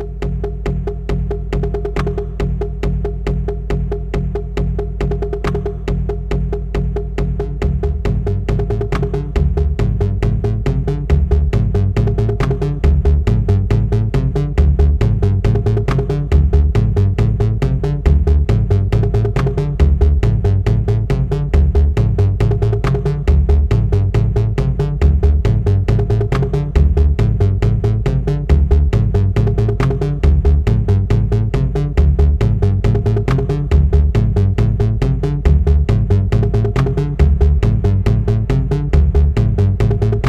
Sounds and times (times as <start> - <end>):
Drum: 0.0 - 40.2
Drum machine: 0.0 - 40.2.